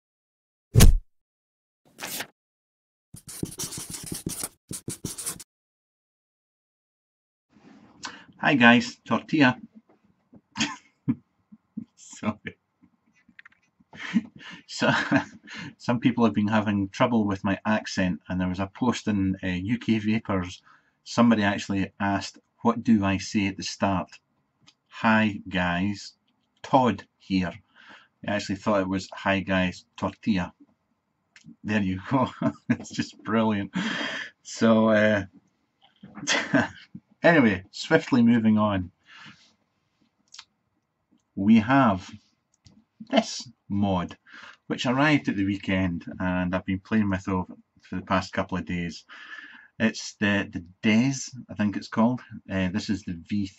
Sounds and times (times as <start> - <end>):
Inside, small room: 3.2 - 5.4, 7.5 - 53.5
Speech: 8.1 - 9.7, 11.8 - 12.5, 14.2 - 24.2, 24.9 - 27.6, 28.2 - 30.6, 31.4 - 35.3, 36.1 - 39.0, 41.4 - 42.2, 43.0 - 53.5.